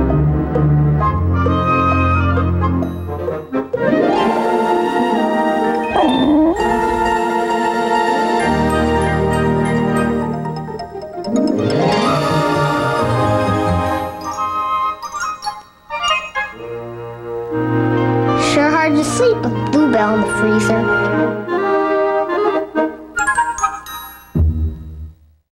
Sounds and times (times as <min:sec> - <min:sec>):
Music: 0:00.0 - 0:25.5
Speech: 0:18.4 - 0:21.2.